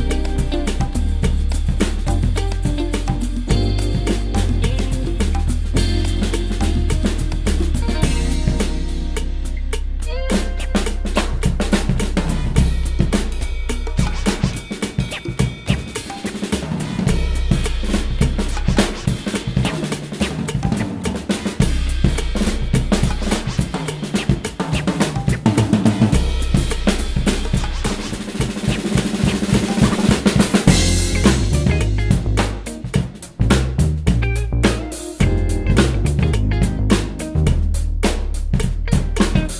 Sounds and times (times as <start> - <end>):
Bass drum: 0.0 - 39.5
Drum kit: 0.0 - 39.5
Hi-hat: 0.0 - 39.5
Rimshot: 0.0 - 39.5.